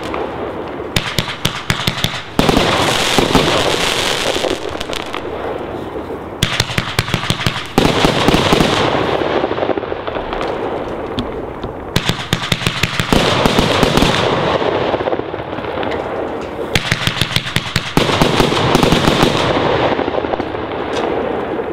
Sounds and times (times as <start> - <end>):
Fireworks: 0.0 - 21.7.